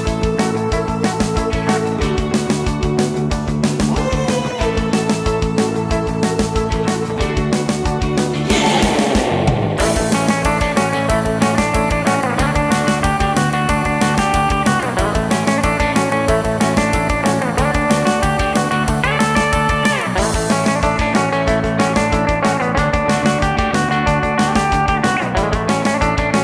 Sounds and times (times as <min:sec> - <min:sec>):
Music: 0:00.0 - 0:26.4.